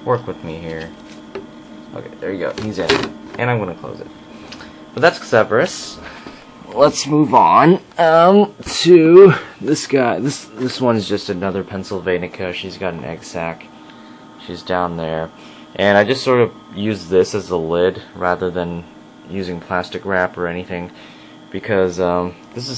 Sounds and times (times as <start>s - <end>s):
Speech: 0.0s - 1.0s, 1.9s - 4.1s, 5.0s - 6.0s, 6.7s - 13.7s, 14.4s - 22.7s.